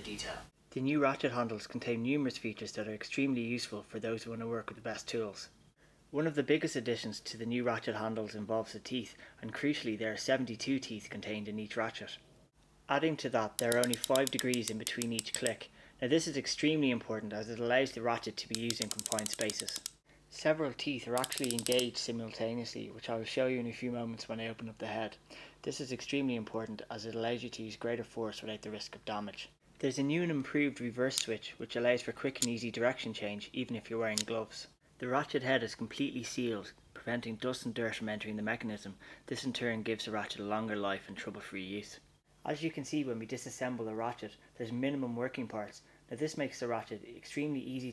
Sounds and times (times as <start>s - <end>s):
Speech: 0.0s - 12.2s, 12.9s - 47.9s.